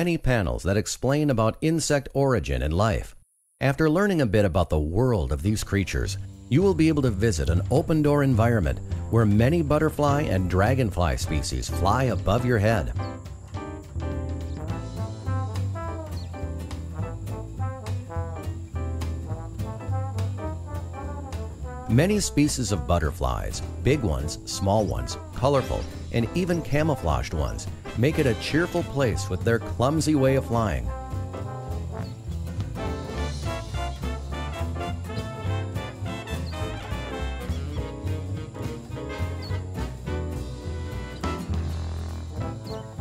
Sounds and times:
Speech: 0:00.0 - 0:13.0, 0:21.9 - 0:30.9
Music: 0:04.3 - 0:43.0.

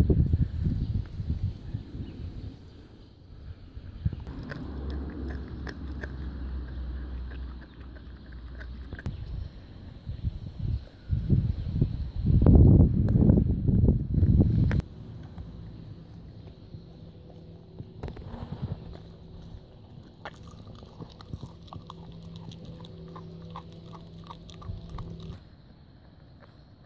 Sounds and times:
Outside, rural or natural: 0:00.0 - 0:26.8
Dog: 0:19.9 - 0:25.4.

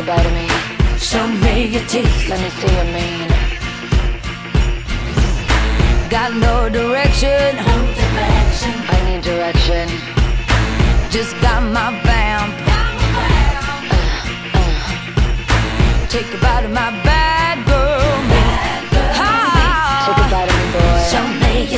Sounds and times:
Music: 0:00.0 - 0:21.7.

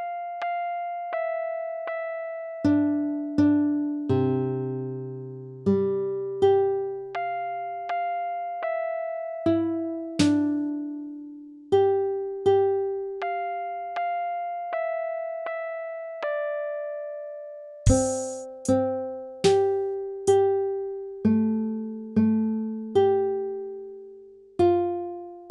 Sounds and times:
Music: 0:00.0 - 0:25.5.

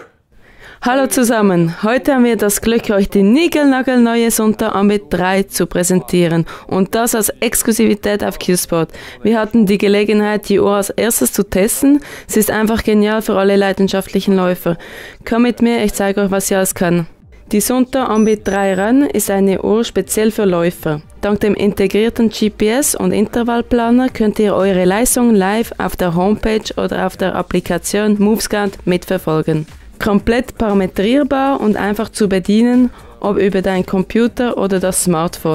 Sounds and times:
Music: 0:00.8 - 0:35.5
Speech: 0:00.8 - 0:35.5.

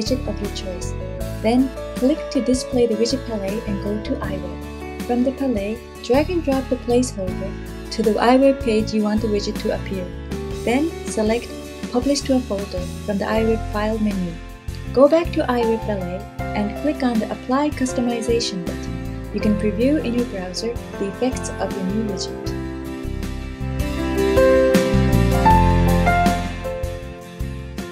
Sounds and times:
Speech: 0:00.0 - 0:14.4, 0:15.0 - 0:22.5
Music: 0:00.0 - 0:27.9.

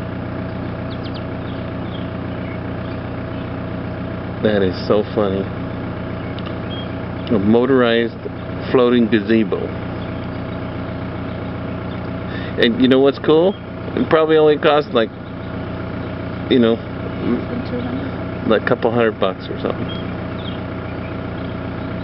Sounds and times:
Speech: 0:04.4 - 0:05.5, 0:07.3 - 0:09.7, 0:12.6 - 0:15.1, 0:16.5 - 0:19.9.

